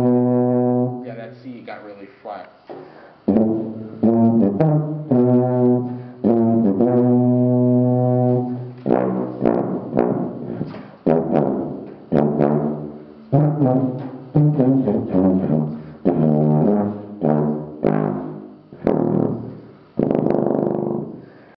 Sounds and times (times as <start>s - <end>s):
Music: 0.0s - 1.2s, 3.2s - 21.5s.